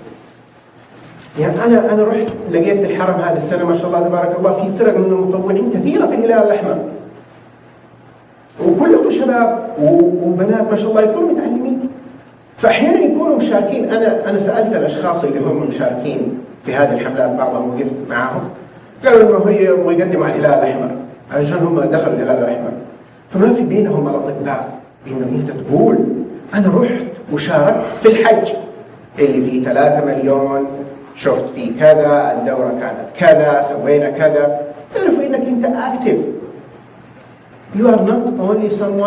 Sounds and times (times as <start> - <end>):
Speech: 1.4 - 7.0, 8.5 - 12.0, 12.6 - 36.6, 37.7 - 39.0.